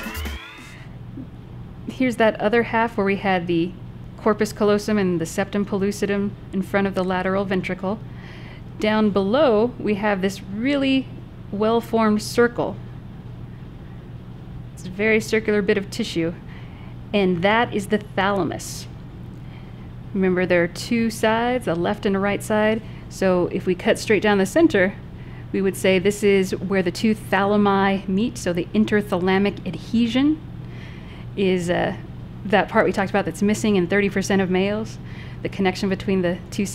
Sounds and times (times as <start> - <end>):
Speech: 1.9 - 8.0, 8.8 - 12.8, 14.8 - 16.4, 17.2 - 18.9, 20.2 - 25.0, 25.6 - 30.4, 31.4 - 36.7.